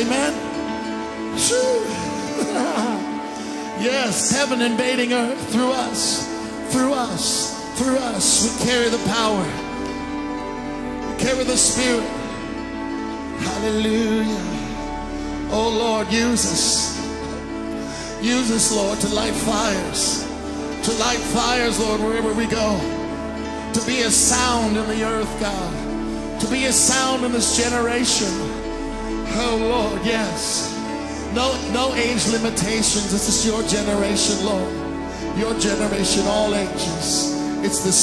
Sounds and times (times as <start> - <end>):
Music: 0.0 - 38.0.